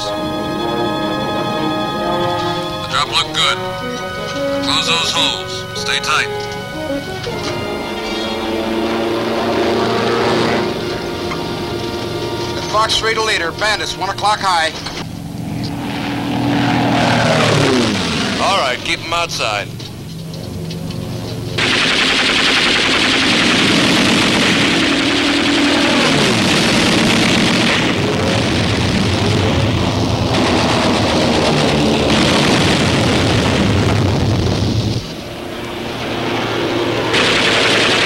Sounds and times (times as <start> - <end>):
Music: 0.0 - 15.0
Speech: 12.6 - 14.8, 18.4 - 19.7.